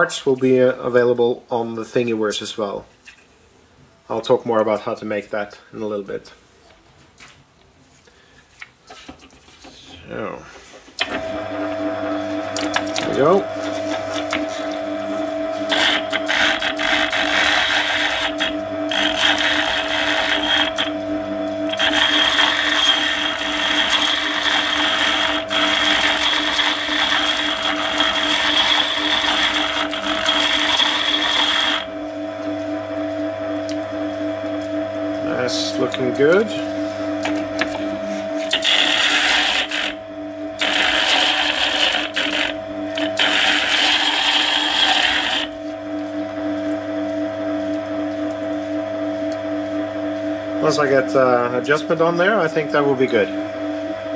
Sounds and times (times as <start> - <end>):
Speech: 0.0 - 2.9, 4.1 - 6.4, 10.0 - 10.5, 13.0 - 13.5, 35.2 - 36.7, 50.6 - 53.4.